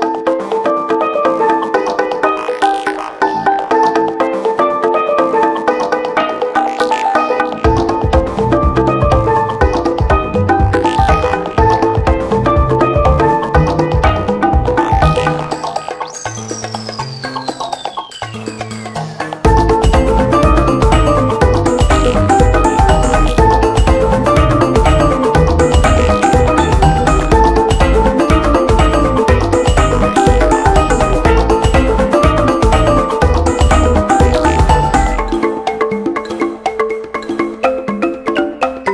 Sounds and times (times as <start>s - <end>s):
Music: 0.0s - 38.9s.